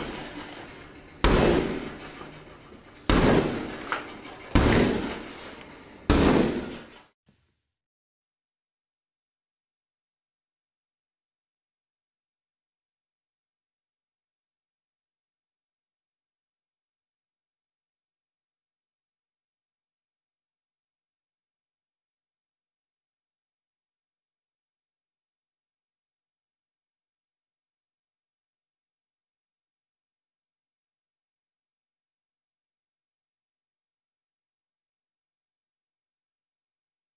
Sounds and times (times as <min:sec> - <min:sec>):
Door: 0:00.0 - 0:07.1.